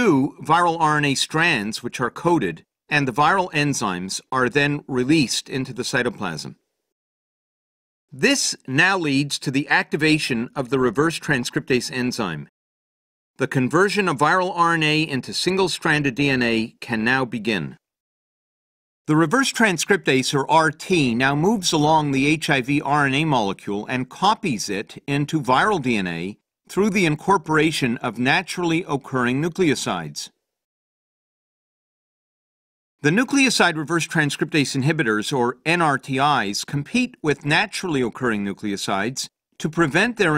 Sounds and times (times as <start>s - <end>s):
Speech: 0.0s - 6.6s, 8.1s - 12.5s, 13.4s - 17.9s, 19.1s - 30.4s, 33.0s - 40.3s.